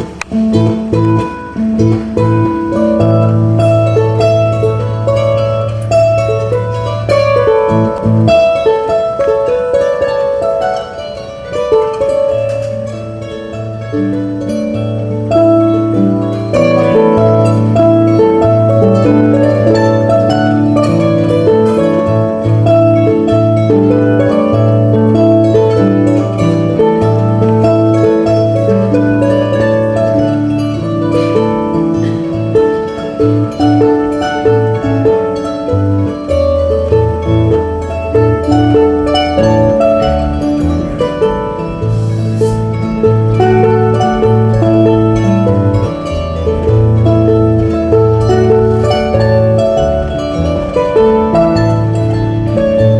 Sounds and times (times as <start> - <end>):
Harp: 0.0 - 52.9.